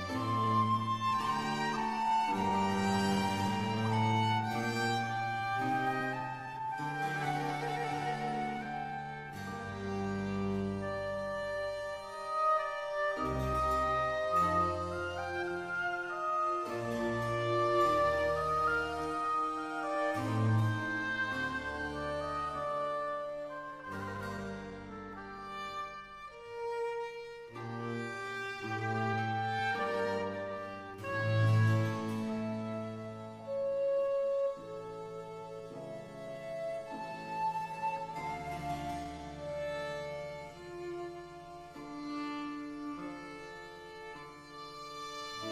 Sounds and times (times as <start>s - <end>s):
Cello: 0.0s - 45.5s
Violin, fiddle: 0.0s - 45.5s.